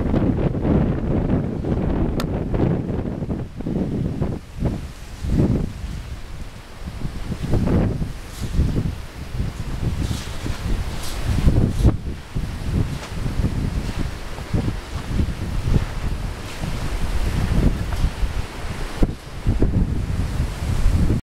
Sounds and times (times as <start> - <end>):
Wind noise (microphone): 0.0 - 21.2.